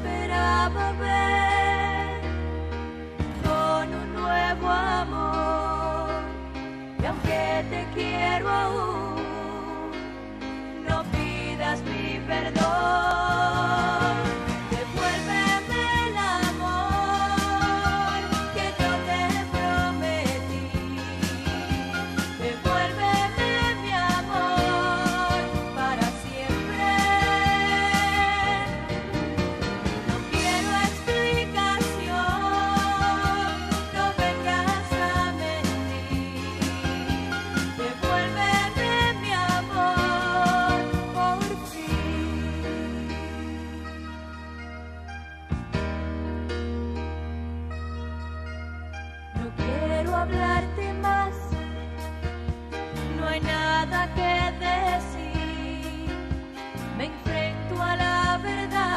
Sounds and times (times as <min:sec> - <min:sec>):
Music: 0:00.0 - 0:58.9.